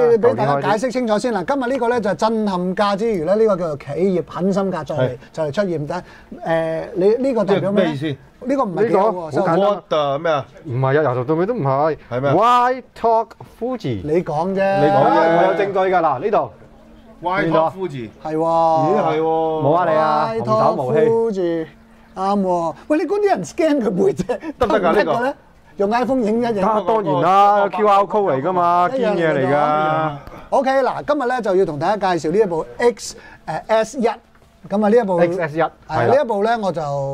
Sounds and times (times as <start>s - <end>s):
Speech: 0.0s - 16.5s, 17.2s - 37.1s.